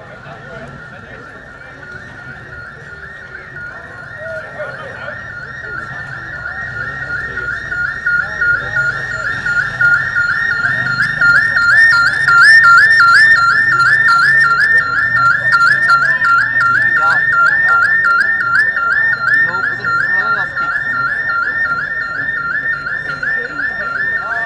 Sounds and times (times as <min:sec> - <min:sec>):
Outside, urban or manmade: 0:00.0 - 0:24.4
Speech: 0:00.0 - 0:24.4.